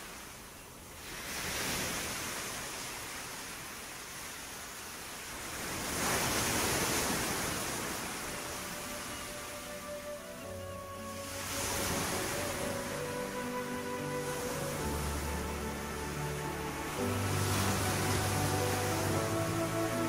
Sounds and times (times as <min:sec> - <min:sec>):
Waves, surf: 0:00.0 - 0:20.0
Wind: 0:00.0 - 0:20.0.